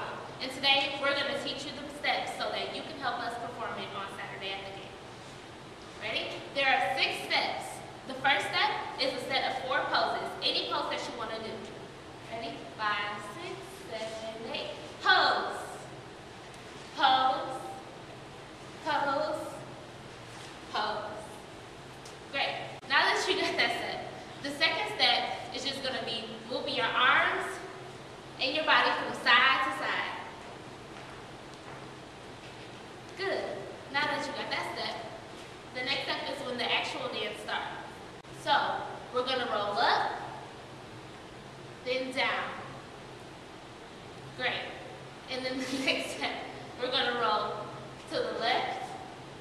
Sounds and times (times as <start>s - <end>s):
Speech: 0.0s - 5.0s, 6.0s - 15.9s, 17.0s - 17.8s, 18.8s - 19.7s, 20.7s - 21.4s, 22.3s - 27.7s, 28.4s - 30.3s, 33.2s - 35.2s, 35.8s - 40.3s, 41.8s - 42.7s, 44.4s - 49.0s.